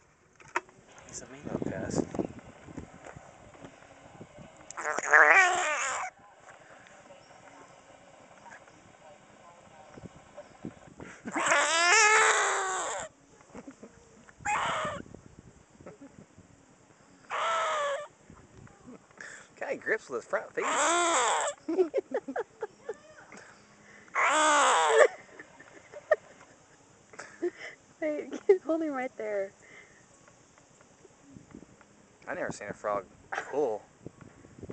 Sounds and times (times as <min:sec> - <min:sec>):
Frog: 0:04.8 - 0:06.2, 0:11.3 - 0:13.2, 0:14.4 - 0:15.1, 0:17.2 - 0:18.2, 0:20.6 - 0:21.6, 0:24.1 - 0:25.2.